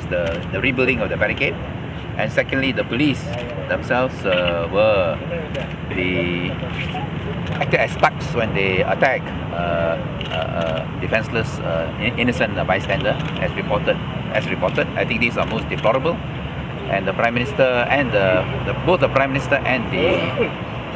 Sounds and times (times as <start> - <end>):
Speech: 2.2 - 16.2, 16.9 - 20.5.